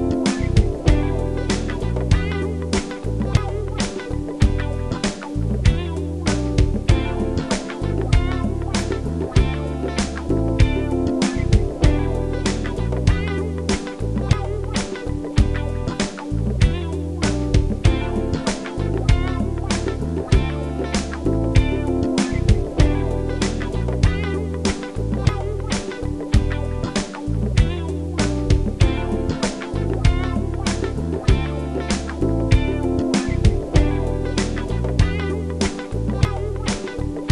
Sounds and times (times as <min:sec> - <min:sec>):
Music: 0:00.0 - 0:37.3.